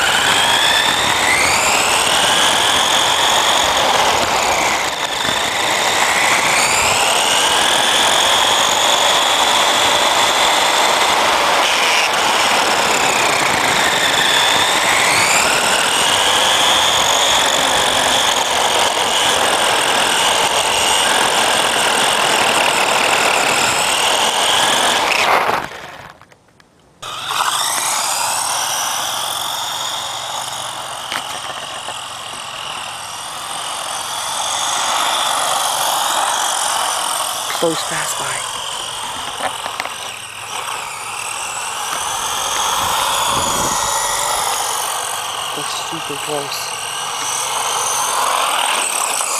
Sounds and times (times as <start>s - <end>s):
Skidding: 0.0s - 46.0s, 46.7s - 49.3s.